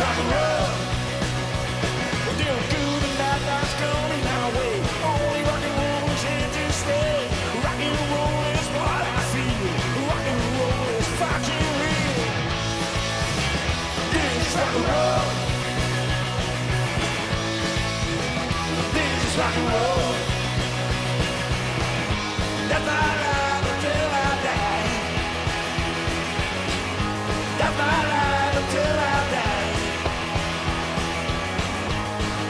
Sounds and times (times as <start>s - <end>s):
Music: 0.0s - 32.5s.